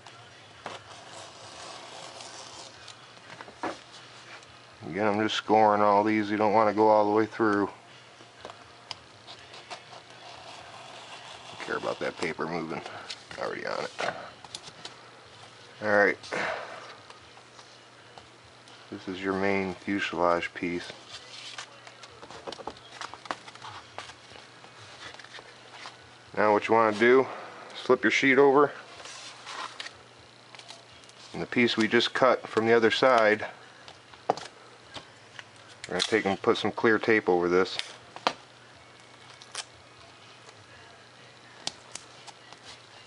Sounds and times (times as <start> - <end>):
Speech: 4.8 - 7.8, 11.6 - 14.2, 15.8 - 16.2, 19.0 - 21.0, 26.4 - 28.8, 31.3 - 33.6, 35.9 - 37.8.